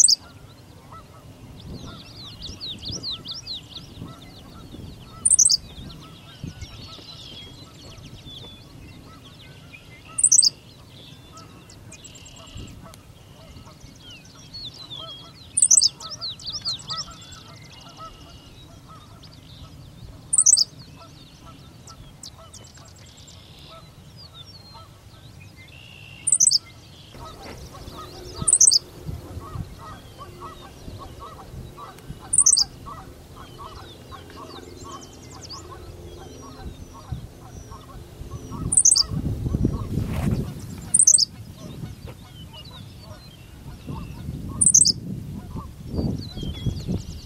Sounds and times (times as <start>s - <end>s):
Chirp, tweet: 0.0s - 47.2s.